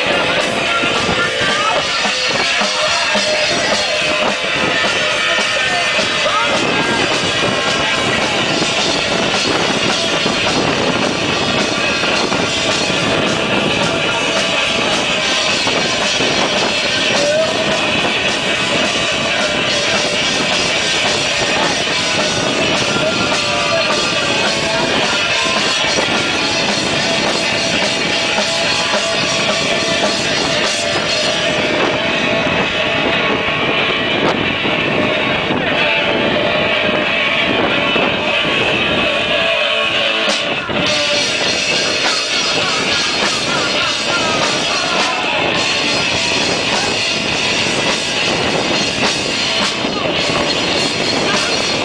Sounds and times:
Music: 0.0 - 51.8.

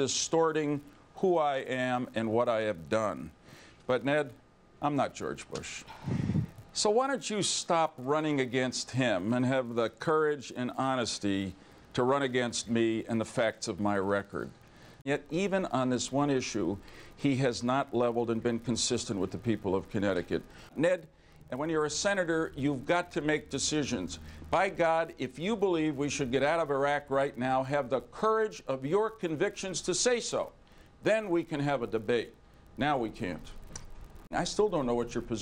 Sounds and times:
Speech: 0.0 - 5.9, 6.8 - 33.6, 34.3 - 35.4.

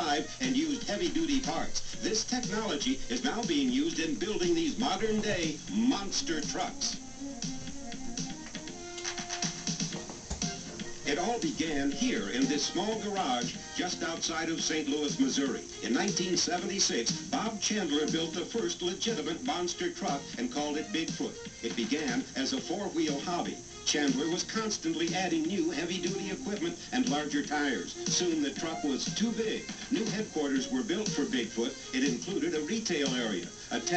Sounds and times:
Speech: 0.0 - 7.0, 11.1 - 33.9
Music: 0.0 - 33.9.

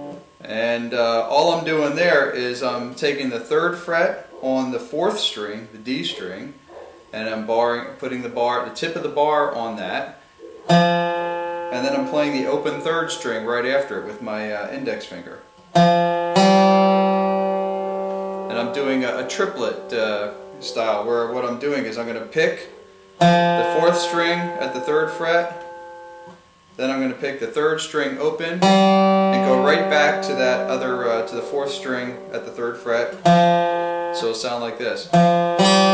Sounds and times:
Speech: 0.0 - 6.6, 7.2 - 10.2, 11.7 - 15.4, 18.5 - 22.7, 23.6 - 25.6, 26.8 - 28.7, 29.3 - 33.2, 34.2 - 35.2
Strum: 9.6 - 35.9
Steel guitar, slide guitar: 10.4 - 15.0, 15.7 - 21.6, 23.2 - 26.4, 28.1 - 35.9.

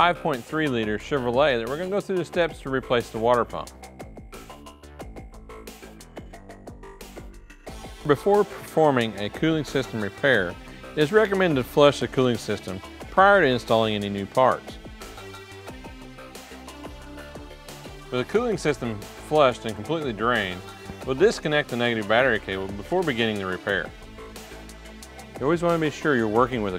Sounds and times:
Speech: 0.0 - 3.7, 8.0 - 14.8, 18.1 - 23.9, 25.4 - 26.7
Music: 0.0 - 26.7.

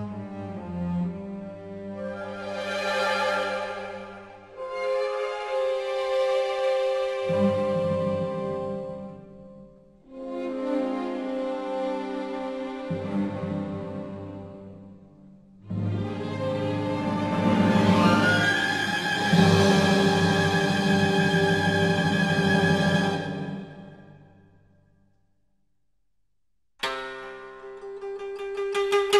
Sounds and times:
Music: 0.0 - 25.3, 26.8 - 29.1.

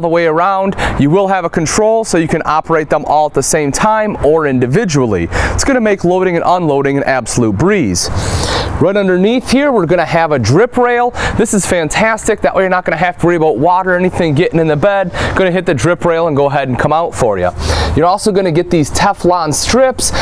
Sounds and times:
Speech: 0.0 - 8.2, 8.8 - 20.2.

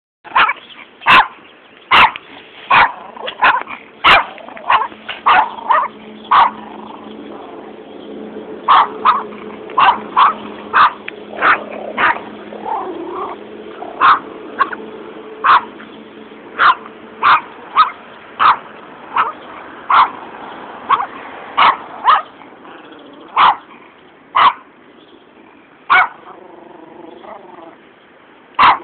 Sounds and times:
Bark: 0.3 - 6.6, 8.7 - 12.2, 14.0 - 14.8, 15.4 - 15.7, 16.6 - 18.6, 19.2 - 20.2, 20.9 - 22.3, 23.4 - 23.6, 24.4 - 24.6, 25.9 - 26.3, 28.6 - 28.8.

